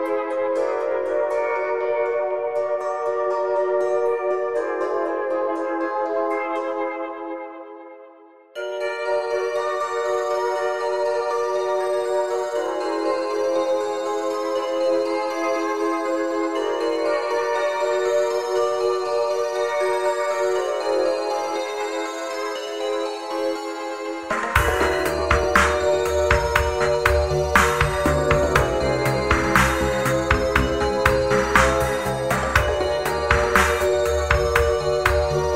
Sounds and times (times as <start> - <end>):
Music: 0.0 - 35.5.